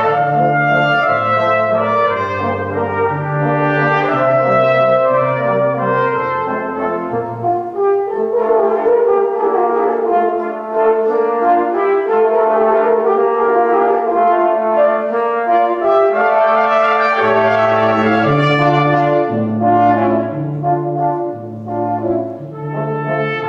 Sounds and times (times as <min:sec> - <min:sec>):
French horn: 0:00.0 - 0:23.4.